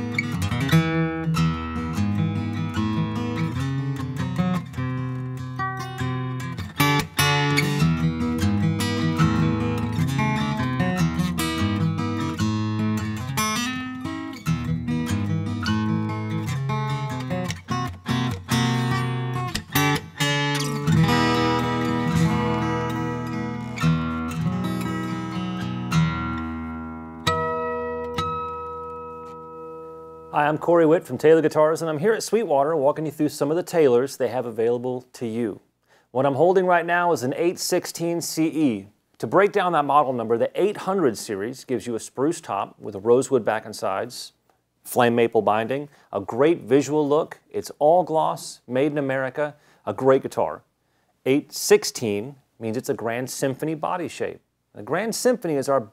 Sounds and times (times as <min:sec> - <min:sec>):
Music: 0:00.0 - 0:30.4
Speech: 0:30.3 - 0:55.9.